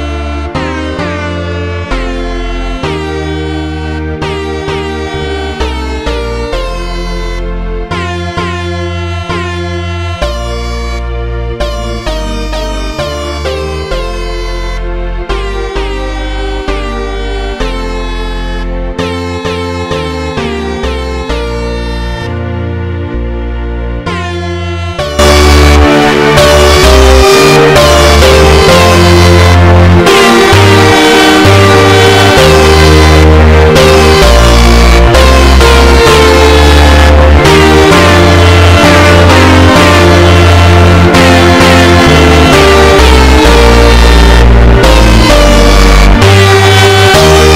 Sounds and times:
Air horn, truck horn: 0.0 - 23.2, 24.0 - 47.5
Music: 0.0 - 47.5.

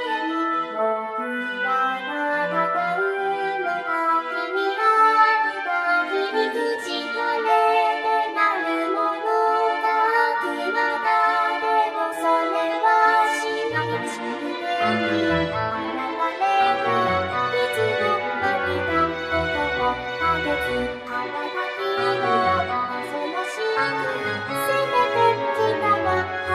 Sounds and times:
Music: 0.0 - 26.5.

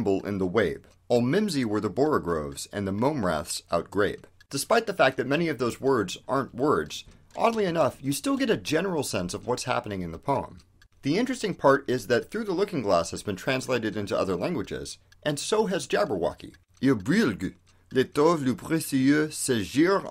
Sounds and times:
Speech: 0.0 - 20.1.

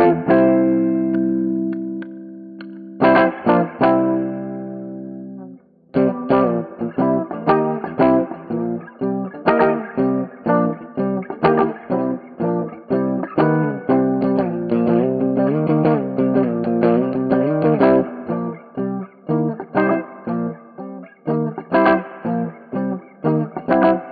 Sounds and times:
Electric guitar: 0.0 - 24.1.

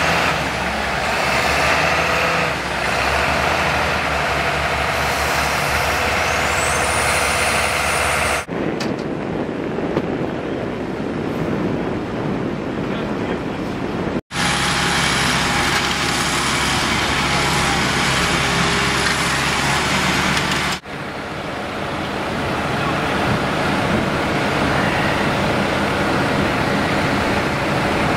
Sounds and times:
Vehicle: 0.0 - 28.1.

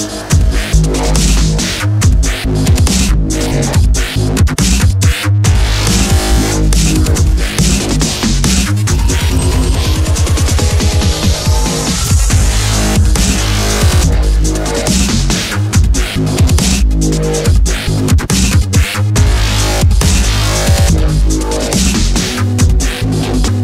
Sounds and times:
Dubstep: 0.0 - 23.6.

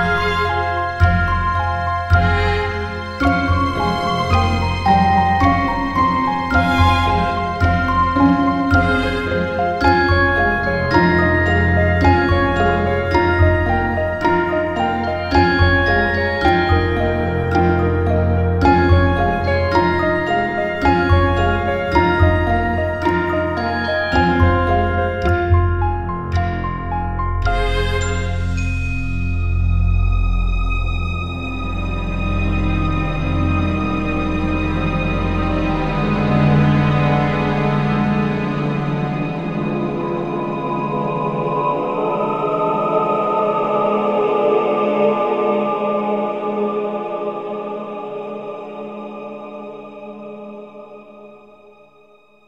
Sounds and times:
Music: 0.0 - 52.4.

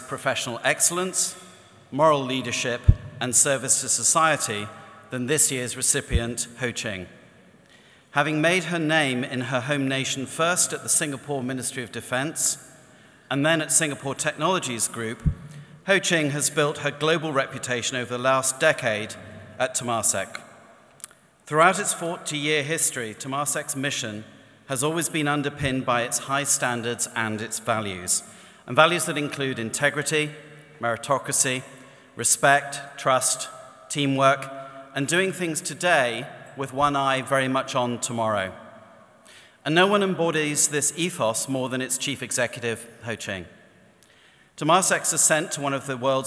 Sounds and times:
Male speech, man speaking: 0.0 - 1.4, 2.0 - 7.1, 8.2 - 12.6, 13.3 - 20.4, 21.5 - 38.6, 39.7 - 43.5, 44.6 - 46.2.

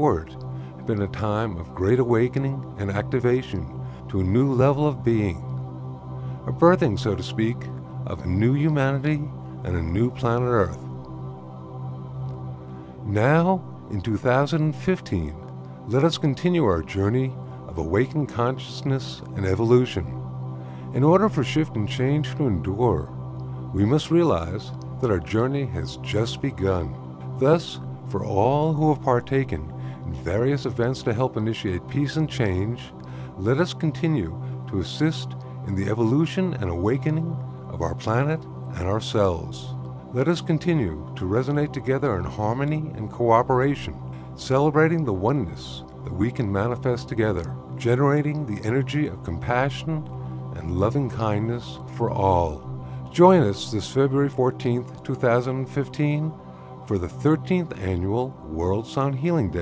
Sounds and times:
Speech: 0.0 - 5.4, 6.5 - 10.8, 13.1 - 20.2, 21.0 - 23.1, 23.8 - 59.6
Music: 0.0 - 59.6.

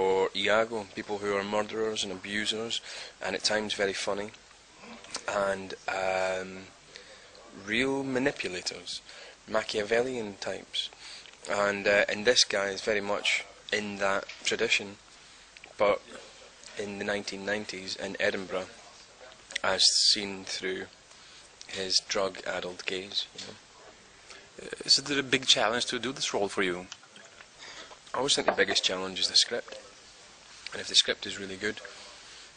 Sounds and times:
Speech: 0.0 - 4.4, 5.1 - 6.8, 7.4 - 15.0, 15.8 - 21.0, 21.7 - 24.0, 24.6 - 27.0, 28.1 - 30.1, 30.7 - 32.3.

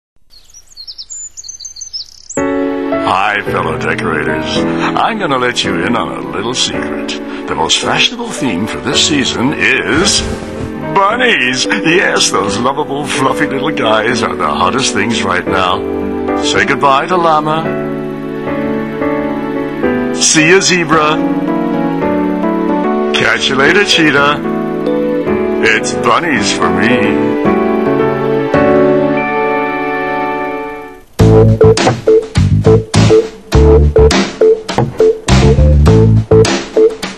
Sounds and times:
Chirp, tweet: 0.2 - 2.4
Music: 2.3 - 37.1
Speech: 3.0 - 10.2, 10.9 - 15.8, 16.4 - 17.7, 23.2 - 24.4, 25.6 - 27.2.

